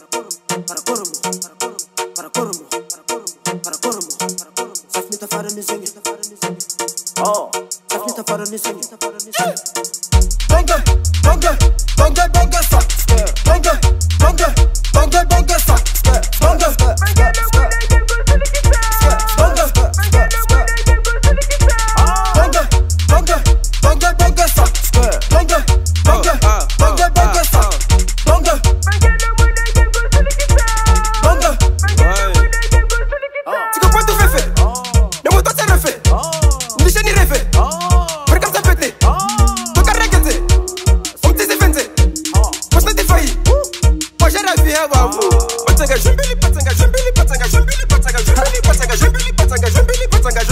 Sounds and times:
Soundtrack music: 0.0 - 33.2, 33.8 - 50.5.

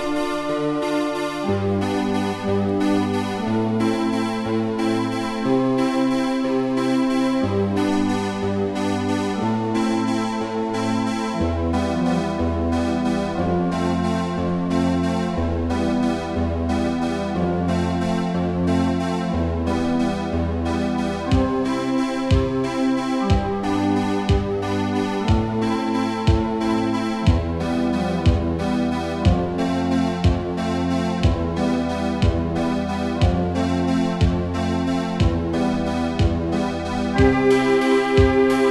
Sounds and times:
Music: 0.0 - 38.7.

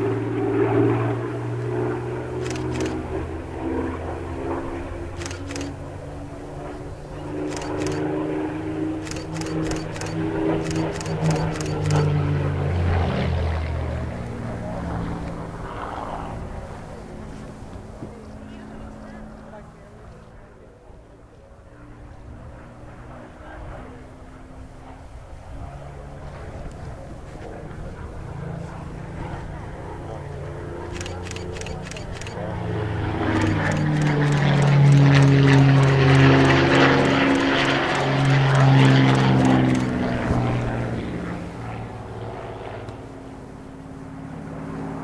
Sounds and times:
Speech: 18.0 - 21.9.

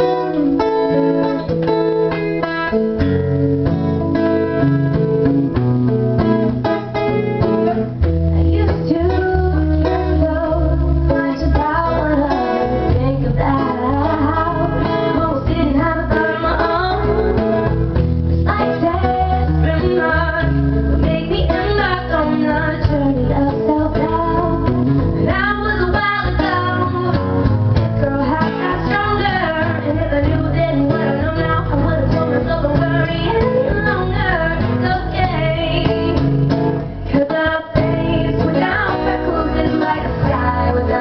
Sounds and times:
Music: 0.0 - 41.0
Female singing: 8.4 - 17.4, 18.5 - 27.3, 28.0 - 36.3, 37.1 - 41.0.

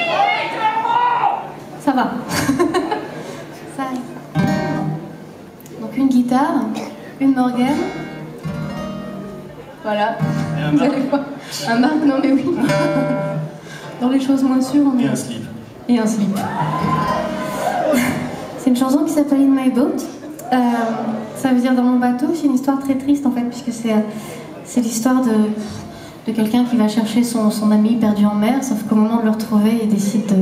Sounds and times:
Music: 7.8 - 9.5.

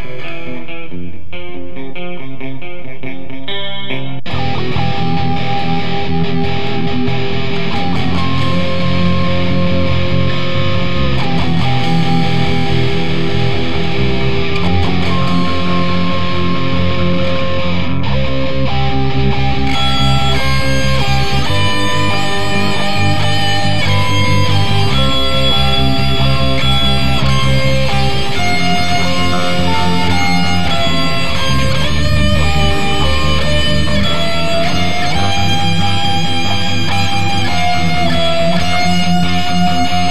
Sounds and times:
Heavy metal: 0.0 - 1.6, 4.2 - 40.1.

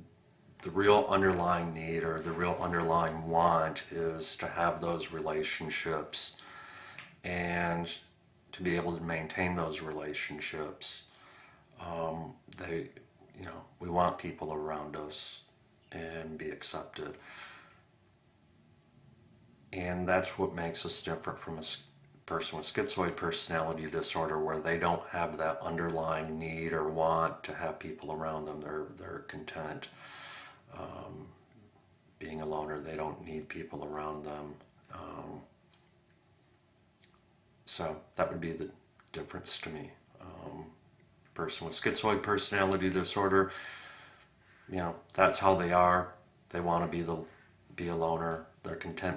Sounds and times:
Inside, small room: 0.0 - 49.1
Speech: 0.6 - 6.4, 7.2 - 11.1, 11.8 - 17.2, 19.8 - 29.9, 30.7 - 31.4, 32.2 - 35.5, 37.7 - 40.8, 41.4 - 43.6, 44.7 - 49.1.

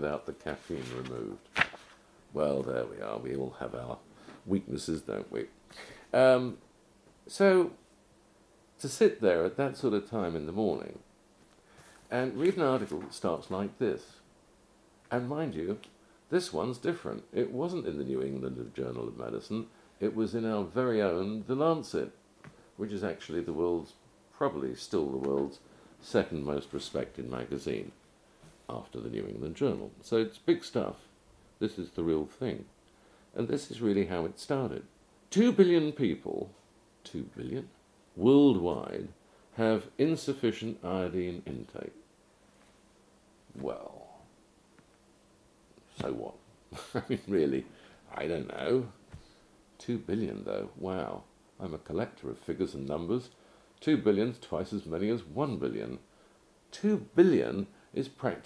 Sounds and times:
Speech: 0.0 - 1.5, 2.3 - 6.6, 7.2 - 7.8, 8.8 - 11.1, 12.1 - 14.3, 15.1 - 22.2, 22.8 - 28.0, 28.7 - 32.7, 33.3 - 42.0, 43.5 - 44.3, 45.8 - 49.0, 49.8 - 56.1, 56.7 - 58.4
Inside, small room: 0.0 - 58.4.

